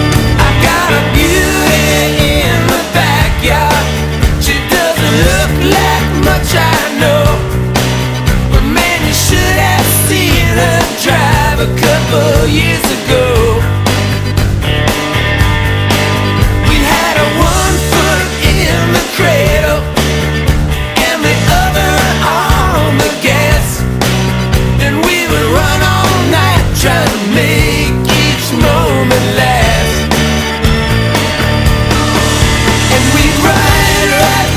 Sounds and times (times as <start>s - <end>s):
Music: 0.0s - 34.5s.